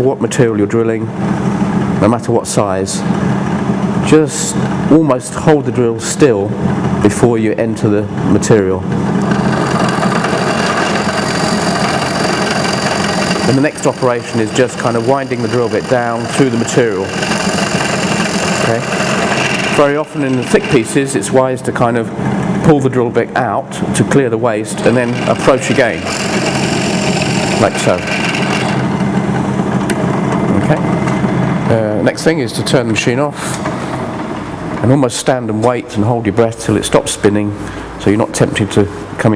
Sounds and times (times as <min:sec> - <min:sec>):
Speech: 0:00.0 - 0:01.1, 0:02.0 - 0:03.1, 0:04.0 - 0:08.9, 0:13.5 - 0:17.1, 0:18.6 - 0:18.9, 0:19.8 - 0:26.1, 0:27.6 - 0:28.1, 0:30.5 - 0:30.9, 0:31.7 - 0:33.6, 0:34.8 - 0:39.3
Drill: 0:09.2 - 0:21.0, 0:24.9 - 0:29.1.